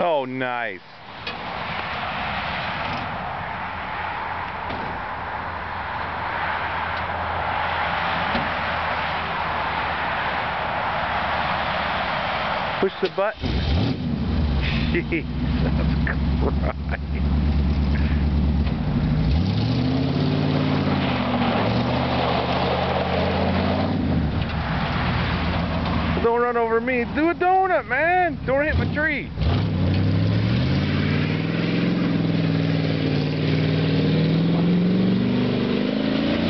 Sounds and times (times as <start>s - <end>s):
Speech: 0.0s - 0.8s, 12.8s - 13.4s, 26.2s - 29.3s
Truck: 0.0s - 36.5s.